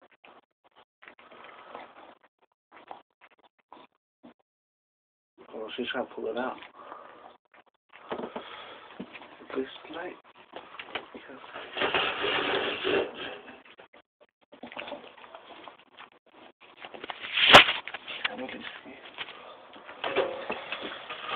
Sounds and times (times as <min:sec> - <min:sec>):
Speech: 0:05.4 - 0:06.6, 0:09.5 - 0:10.2, 0:18.3 - 0:19.1.